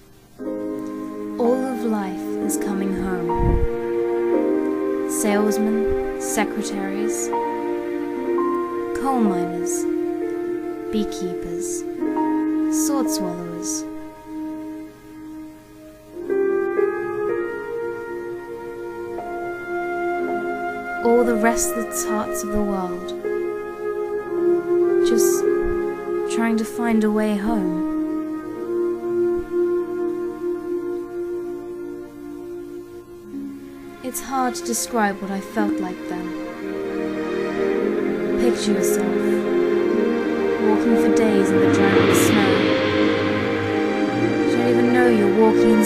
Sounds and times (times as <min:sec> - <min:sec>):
Music: 0:00.0 - 0:45.8
Narration, monologue: 0:00.7 - 0:14.0, 0:20.9 - 0:23.6, 0:33.7 - 0:45.8
Female speech, woman speaking: 0:01.4 - 0:03.4, 0:05.1 - 0:07.3, 0:08.9 - 0:09.9, 0:10.9 - 0:11.9, 0:12.7 - 0:13.9, 0:21.0 - 0:23.2, 0:25.0 - 0:25.5, 0:26.3 - 0:27.9, 0:34.0 - 0:36.4, 0:38.4 - 0:39.4, 0:40.6 - 0:42.8, 0:44.5 - 0:45.8.